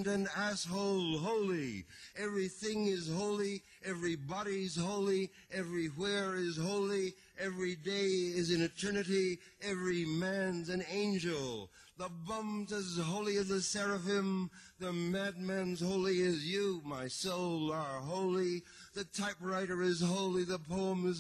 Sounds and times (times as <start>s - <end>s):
Speech: 0.0s - 21.2s.